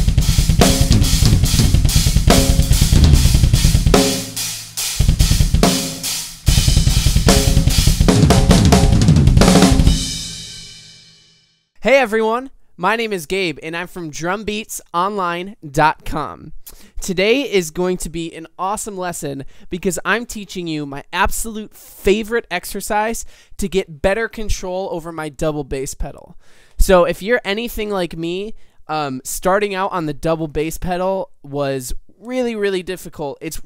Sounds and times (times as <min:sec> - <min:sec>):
Speech: 0:11.8 - 0:33.6.